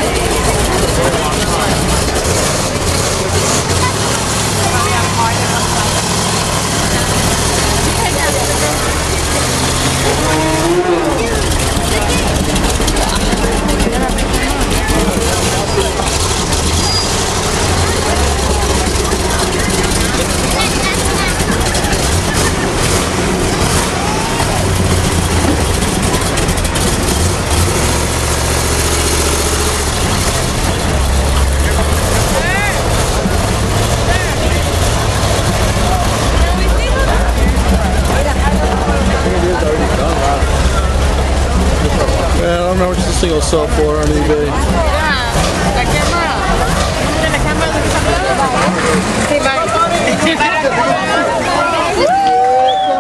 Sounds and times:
Speech: 0.0s - 24.7s, 30.8s - 53.0s
Car: 0.0s - 53.0s.

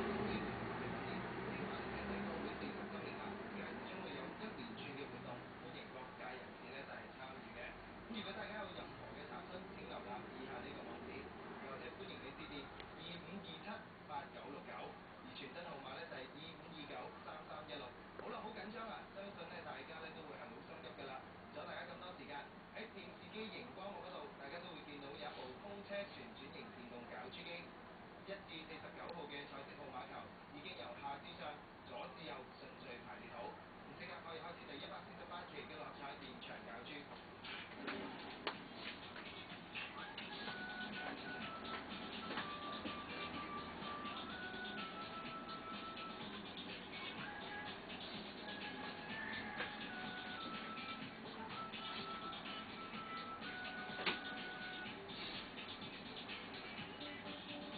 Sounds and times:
Speech: 1.1s - 37.2s.

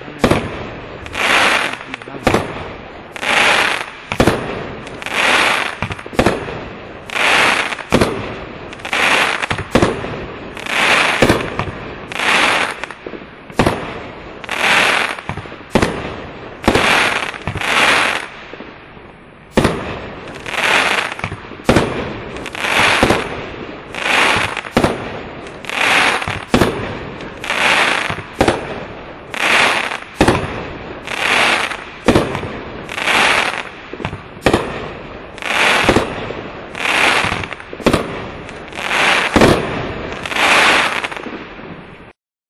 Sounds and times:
Firecracker: 0.0s - 42.2s
Outside, urban or manmade: 0.0s - 42.2s.

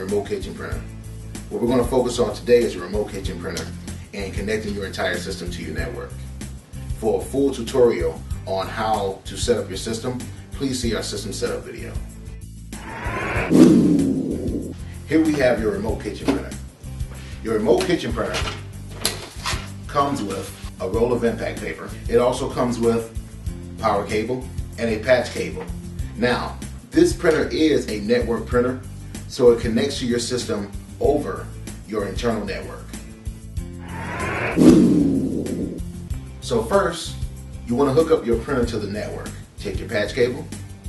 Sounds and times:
Speech: 0.0s - 0.8s, 1.5s - 6.1s, 6.9s - 12.0s, 15.1s - 16.6s, 17.4s - 18.6s, 19.9s - 23.2s, 23.8s - 32.9s, 36.4s - 40.5s
Music: 0.0s - 40.8s.

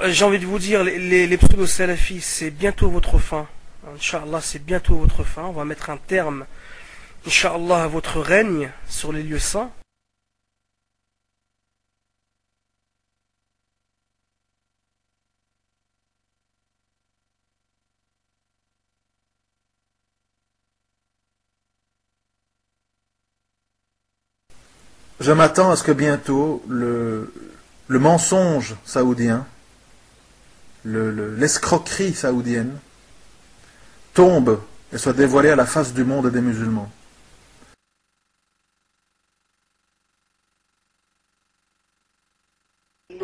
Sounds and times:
Speech: 0.0s - 6.5s, 7.2s - 9.8s, 25.2s - 29.6s, 30.8s - 32.9s, 34.2s - 37.0s.

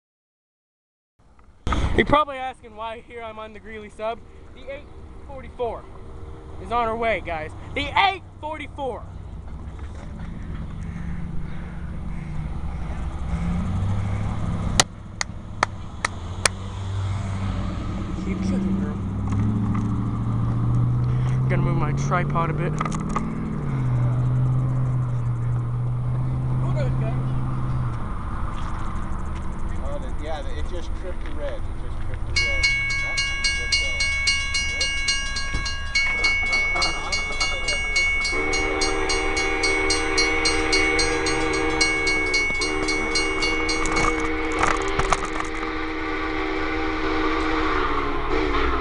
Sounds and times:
Speech: 2.0s - 5.8s, 6.6s - 9.1s, 21.5s - 22.8s, 29.7s - 34.1s.

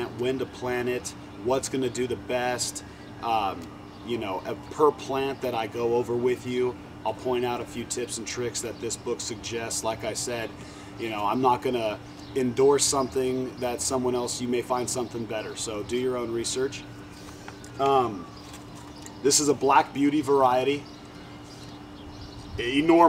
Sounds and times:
Speech: 0.0s - 16.8s, 17.8s - 18.3s, 19.2s - 20.9s, 22.6s - 23.0s.

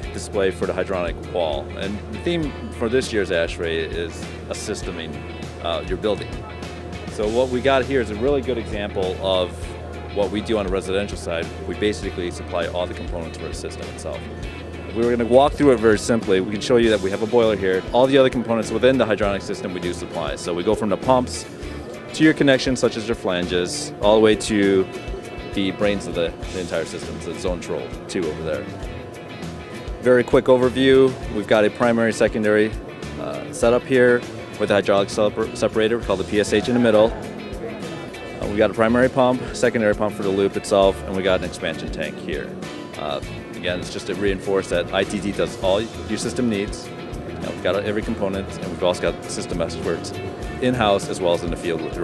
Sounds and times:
Speech: 0.0s - 14.2s, 14.9s - 21.5s, 22.1s - 24.9s, 25.6s - 28.7s, 30.0s - 37.3s, 38.4s - 46.8s, 47.4s - 52.0s
Music: 0.0s - 52.0s.

